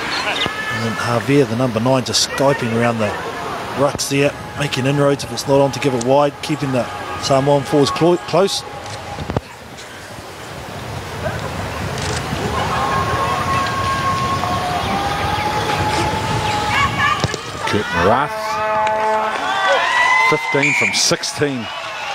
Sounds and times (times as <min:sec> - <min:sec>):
Outside, urban or manmade: 0:00.0 - 0:22.1.